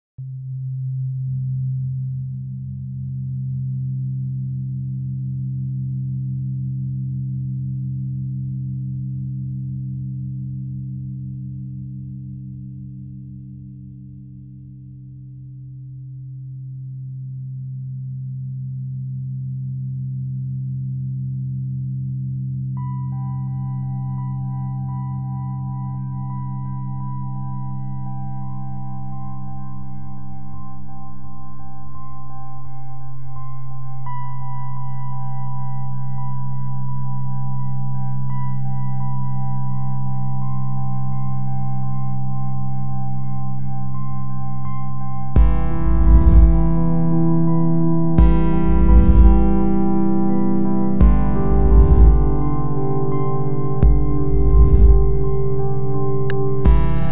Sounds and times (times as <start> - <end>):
Sine wave: 0.0 - 57.1.